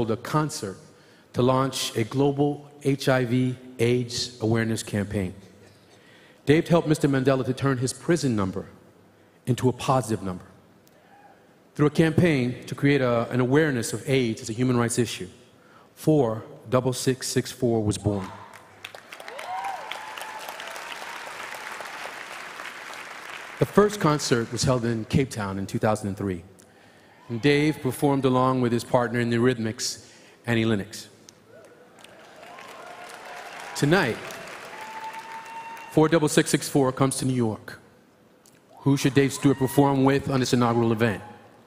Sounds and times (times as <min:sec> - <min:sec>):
Speech: 0:00.0 - 0:00.8, 0:01.4 - 0:05.4, 0:06.5 - 0:08.8, 0:09.5 - 0:10.5, 0:11.8 - 0:15.3, 0:16.0 - 0:18.4, 0:23.6 - 0:26.5, 0:27.3 - 0:31.1, 0:33.8 - 0:34.2, 0:36.0 - 0:37.8, 0:38.8 - 0:41.3.